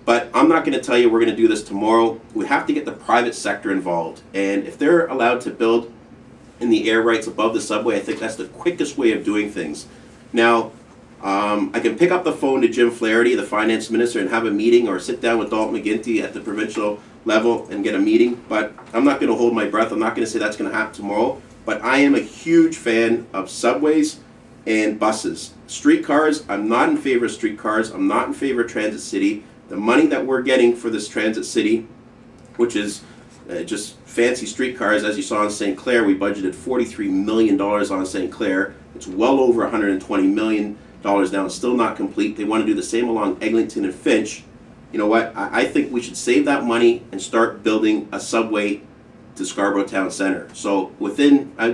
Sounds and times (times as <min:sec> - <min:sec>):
Speech: 0:00.0 - 0:06.0, 0:06.6 - 0:31.9, 0:32.6 - 0:51.7.